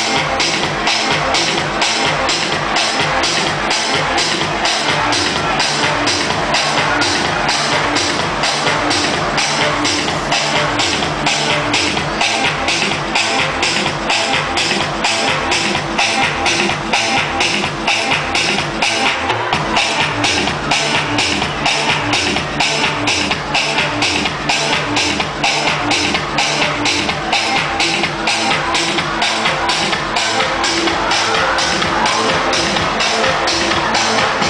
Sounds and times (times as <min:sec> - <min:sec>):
Electronica: 0:00.0 - 0:34.5.